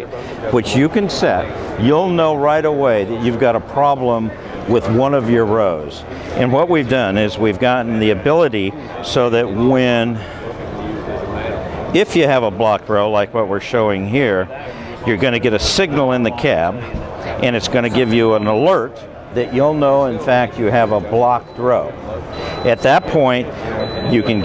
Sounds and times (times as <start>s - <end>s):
Speech: 0.0s - 24.4s.